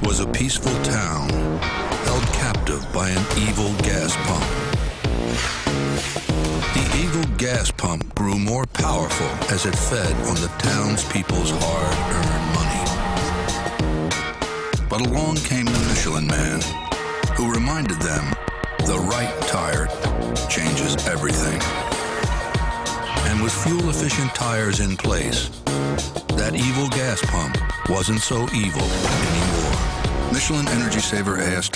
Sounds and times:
Speech: 0.0 - 1.4, 2.1 - 4.7, 6.7 - 13.3, 14.9 - 21.7, 23.2 - 25.6, 26.3 - 31.7
Music: 0.0 - 31.7.

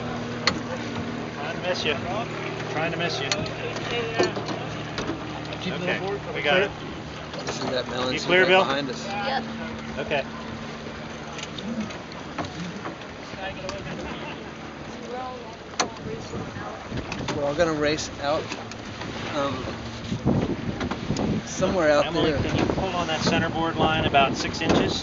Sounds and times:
Sailboat, sailing ship: 0.0 - 25.0
Speech: 21.5 - 25.0.

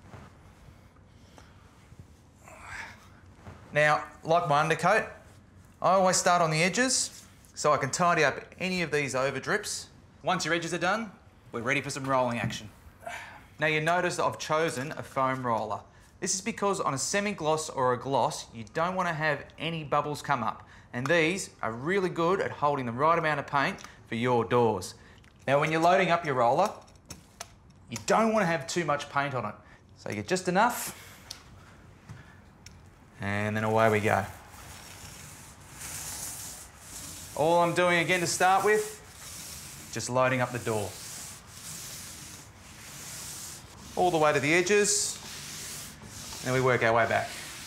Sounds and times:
Speech: 3.7 - 5.2, 5.8 - 12.7, 13.6 - 26.8, 27.9 - 30.9, 33.2 - 34.4, 37.4 - 39.0, 39.9 - 41.0, 44.0 - 45.2, 46.4 - 47.5.

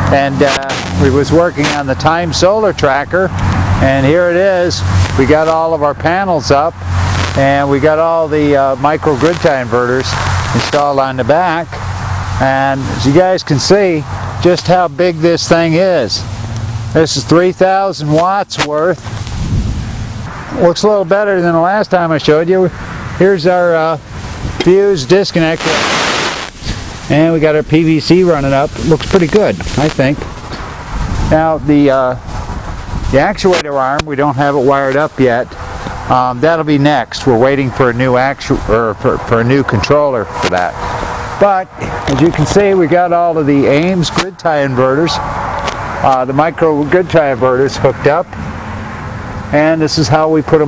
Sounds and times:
Wind noise (microphone): 19.0 - 20.0, 28.4 - 33.6.

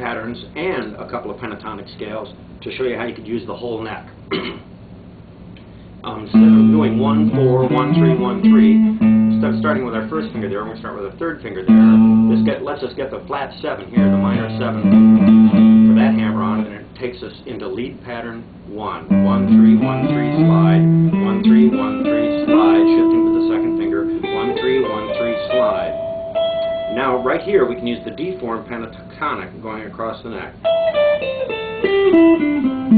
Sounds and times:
Speech: 0.0 - 4.2, 6.0 - 15.0, 15.8 - 26.0, 26.9 - 30.6
Guitar: 5.6 - 17.0, 19.0 - 32.9.

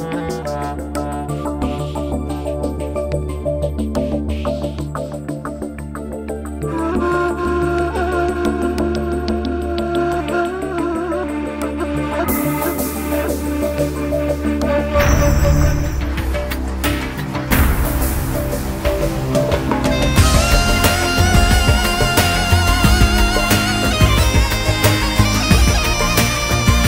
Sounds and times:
Tender music: 0.0 - 26.8.

